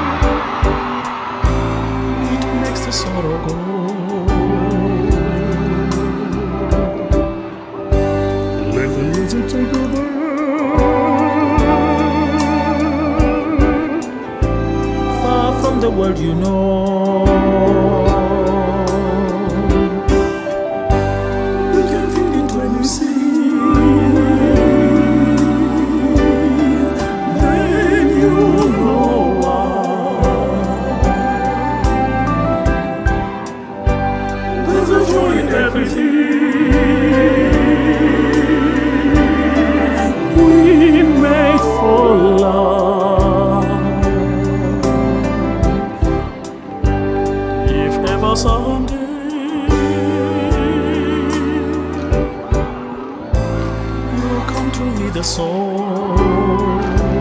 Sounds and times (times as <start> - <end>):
Opera: 0.0 - 57.2.